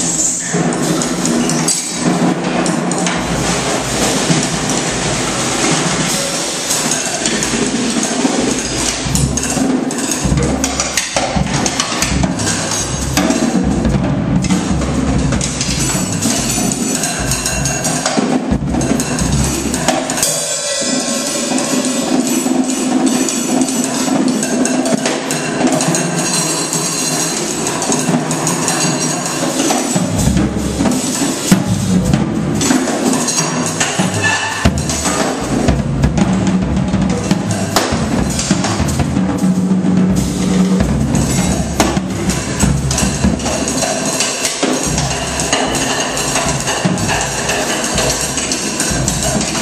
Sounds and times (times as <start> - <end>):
Drum: 0.0 - 49.6
Drum kit: 0.0 - 49.6.